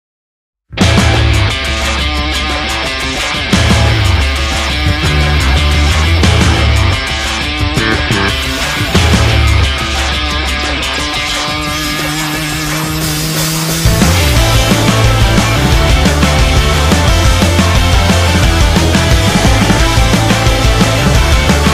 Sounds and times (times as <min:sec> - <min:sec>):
Progressive rock: 0:00.7 - 0:21.7
Punk rock: 0:00.8 - 0:21.7.